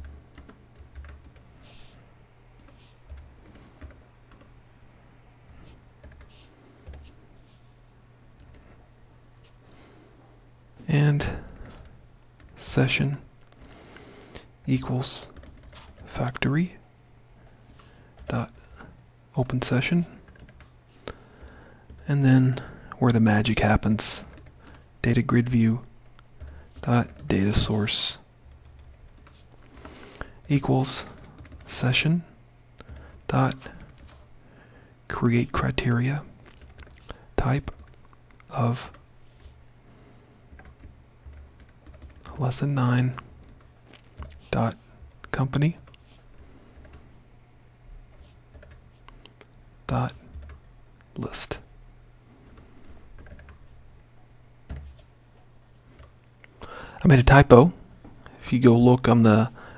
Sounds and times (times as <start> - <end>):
Speech: 10.8 - 11.4, 12.6 - 13.3, 14.7 - 15.4, 16.1 - 16.8, 18.3 - 18.6, 19.4 - 20.2, 22.0 - 24.3, 25.0 - 25.9, 26.8 - 28.3, 30.5 - 32.3, 33.3 - 33.8, 35.1 - 36.3, 37.4 - 37.8, 38.5 - 38.9, 42.3 - 43.2, 44.5 - 45.9, 49.9 - 50.2, 51.2 - 51.7, 57.0 - 57.8, 58.4 - 59.6.